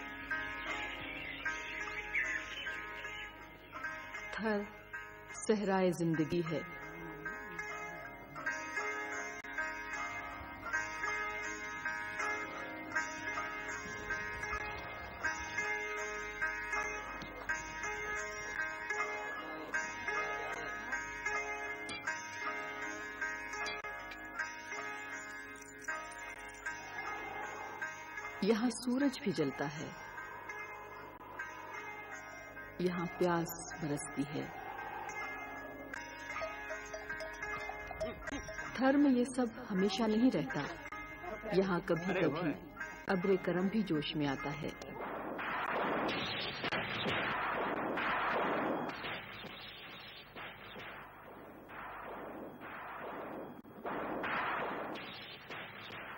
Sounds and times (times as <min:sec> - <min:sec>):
Music: 0:00.0 - 0:56.1.